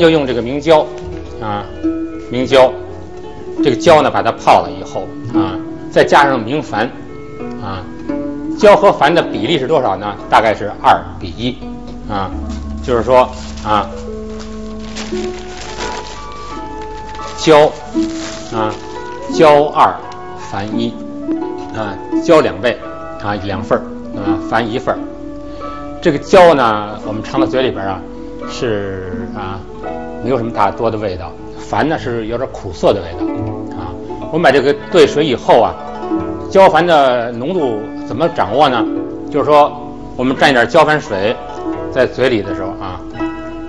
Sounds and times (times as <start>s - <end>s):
Speech: 0.0s - 2.8s, 3.6s - 7.0s, 8.6s - 14.0s, 17.4s - 17.8s, 18.5s - 21.0s, 21.7s - 25.0s, 26.0s - 29.6s, 30.2s - 35.8s, 36.5s - 41.4s, 42.0s - 43.1s
Music: 0.0s - 43.6s.